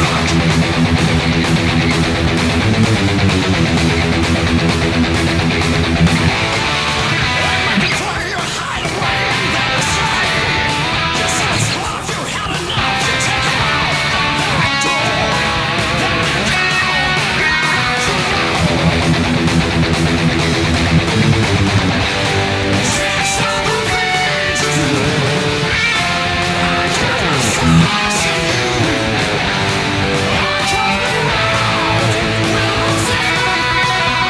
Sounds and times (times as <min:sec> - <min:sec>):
Electric guitar: 0:00.0 - 0:34.3.